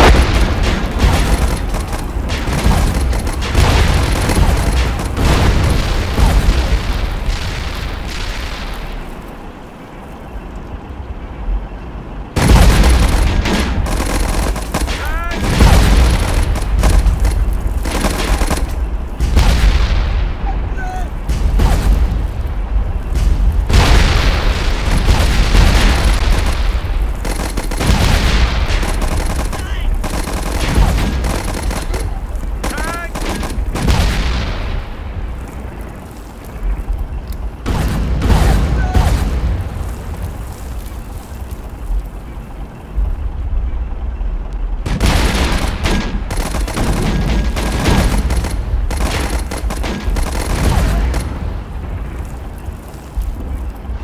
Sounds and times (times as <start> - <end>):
Fusillade: 0.0 - 9.0, 12.4 - 19.9, 23.2 - 34.6, 44.9 - 51.6.